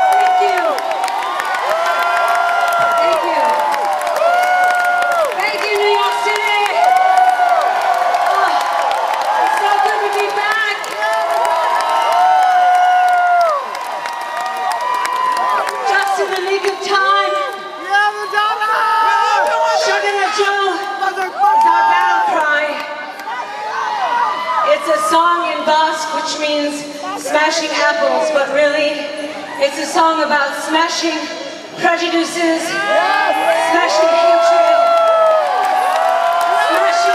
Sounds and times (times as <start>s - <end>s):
Female speech, woman speaking: 3.0s - 3.6s, 5.4s - 6.8s, 9.5s - 10.8s, 15.9s - 17.5s, 24.7s - 32.8s, 33.5s - 34.9s, 36.6s - 37.1s.